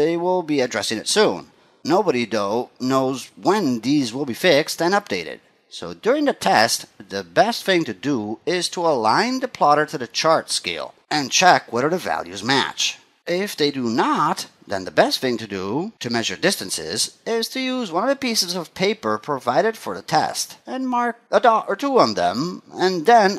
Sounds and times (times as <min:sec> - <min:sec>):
Narration, monologue: 0:00.0 - 0:23.3.